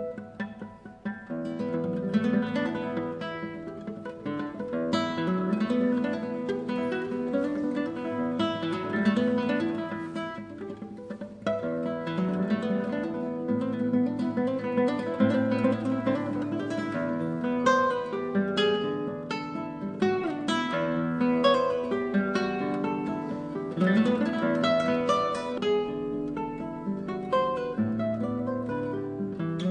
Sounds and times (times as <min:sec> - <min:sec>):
Strum: 0:00.0 - 0:29.7.